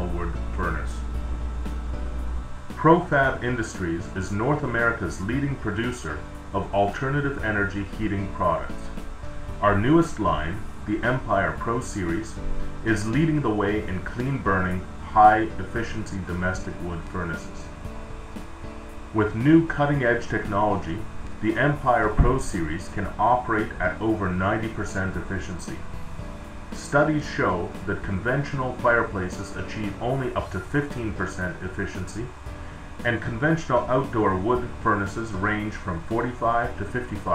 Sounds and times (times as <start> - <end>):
Speech: 0.0 - 1.1, 2.8 - 8.9, 9.6 - 17.7, 19.2 - 25.9, 26.8 - 32.4, 33.0 - 37.3
Music: 0.0 - 37.3.